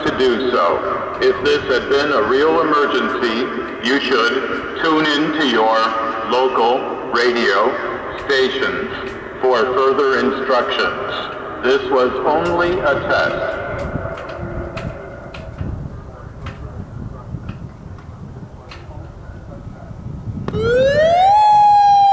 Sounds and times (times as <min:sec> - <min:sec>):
Speech: 0:00.0 - 0:20.0.